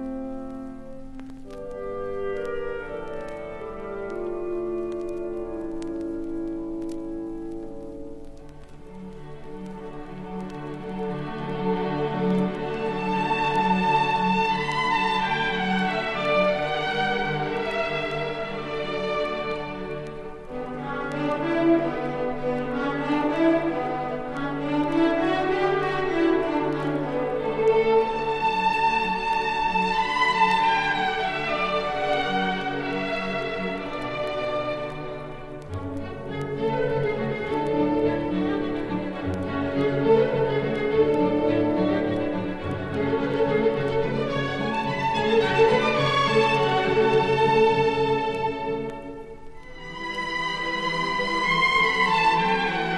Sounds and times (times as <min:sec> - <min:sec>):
Orchestra: 0:00.0 - 0:52.9.